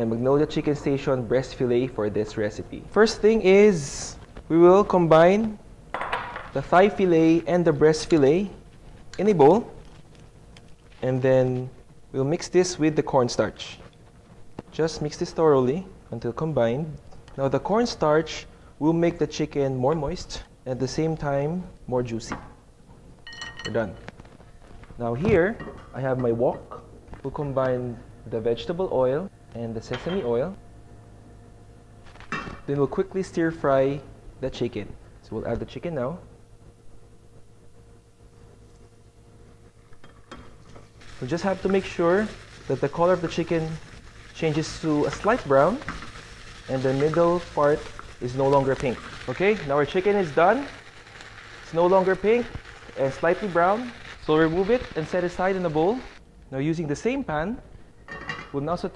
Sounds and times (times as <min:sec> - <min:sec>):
Speech: 0:00.0 - 0:05.6, 0:06.6 - 0:08.6, 0:09.2 - 0:09.8, 0:11.0 - 0:13.8, 0:14.7 - 0:22.5, 0:23.7 - 0:24.0, 0:25.0 - 0:30.6, 0:32.7 - 0:36.3, 0:41.2 - 0:43.8, 0:44.4 - 0:45.9, 0:46.7 - 0:50.8, 0:51.7 - 0:57.7, 0:58.4 - 0:58.9.